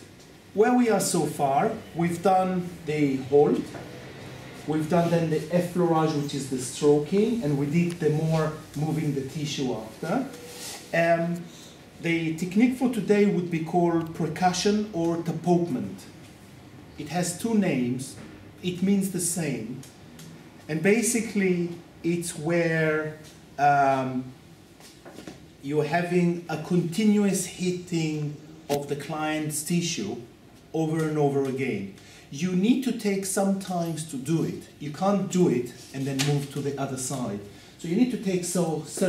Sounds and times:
Speech: 0:00.6 - 0:03.8, 0:04.7 - 0:16.2, 0:17.0 - 0:19.9, 0:20.7 - 0:24.4, 0:25.6 - 0:39.0.

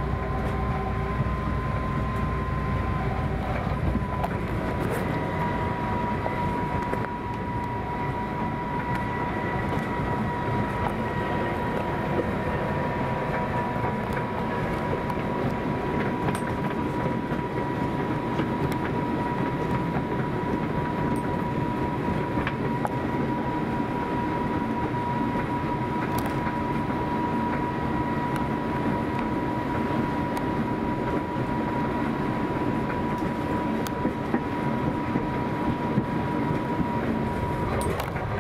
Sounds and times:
Railroad car, train wagon: 0:00.0 - 0:38.4.

